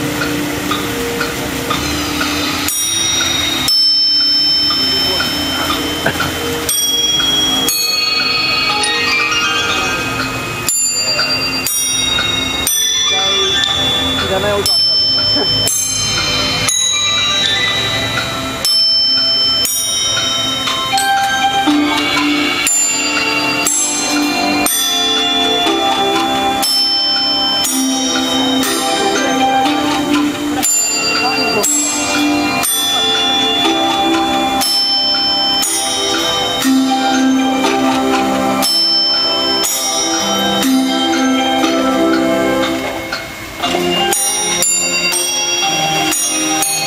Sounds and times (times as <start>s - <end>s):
Music: 0.0s - 46.8s
Speech: 10.9s - 18.2s, 28.4s - 33.0s.